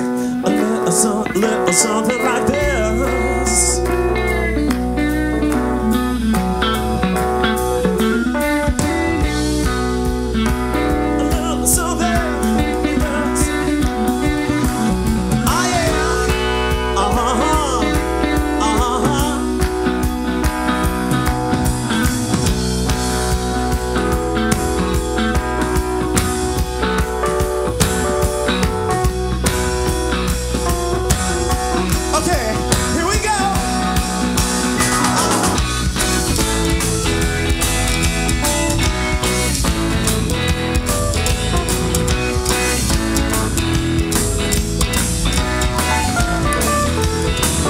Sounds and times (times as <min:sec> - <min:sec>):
Music: 0:00.0 - 0:47.6.